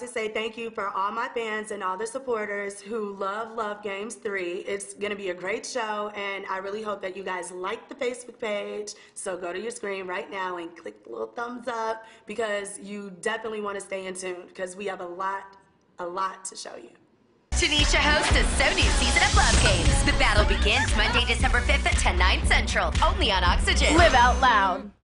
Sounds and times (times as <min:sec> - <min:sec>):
Speech: 0:00.0 - 0:17.0, 0:17.6 - 0:25.0
Music: 0:17.5 - 0:25.0.